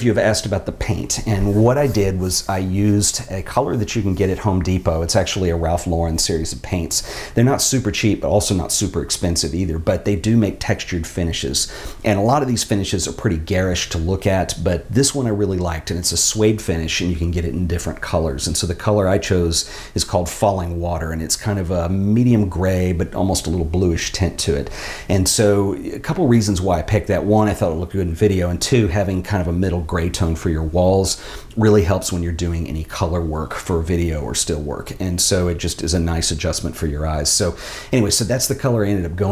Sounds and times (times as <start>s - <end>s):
Speech: 0.0s - 39.3s.